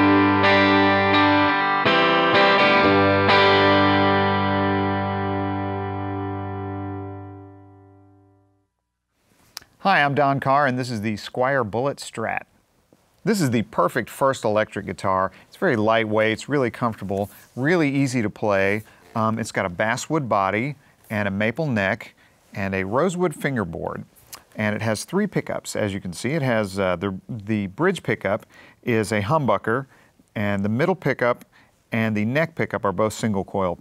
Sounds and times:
Speech: 9.8s - 12.5s, 13.2s - 33.8s.

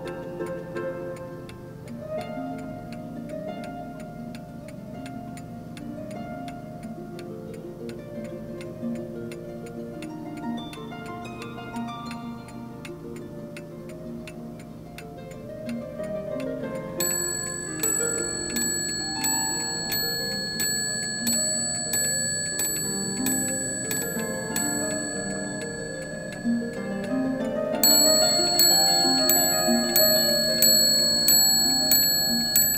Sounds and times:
Music: 0.0s - 20.3s, 22.6s - 32.7s
Tick-tock: 0.0s - 32.7s.

